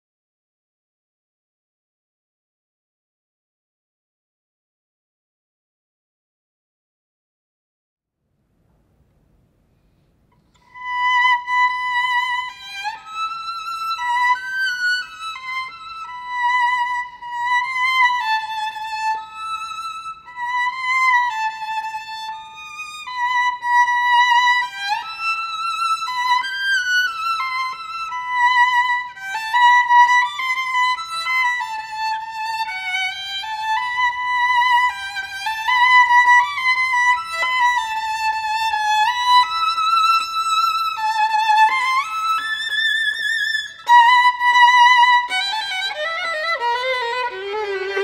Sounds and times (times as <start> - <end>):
Violin, fiddle: 10.5 - 48.0.